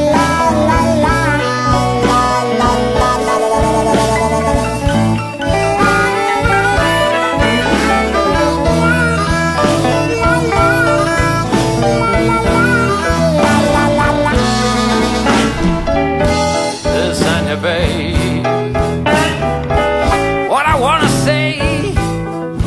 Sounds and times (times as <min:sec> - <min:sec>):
Musical instrument: 0:00.0 - 0:22.6.